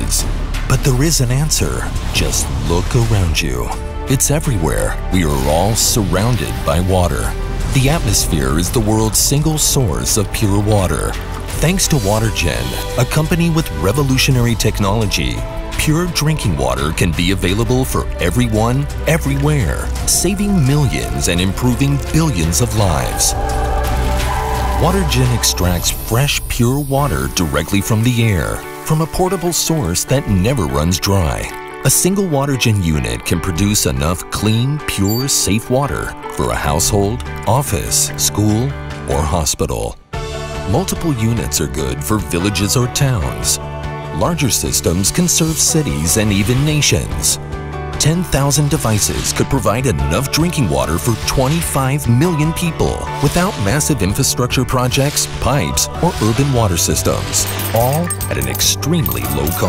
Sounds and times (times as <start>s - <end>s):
Speech: 0.0s - 23.4s, 24.8s - 40.0s, 40.7s - 47.4s, 48.0s - 59.6s
Music: 0.0s - 59.6s.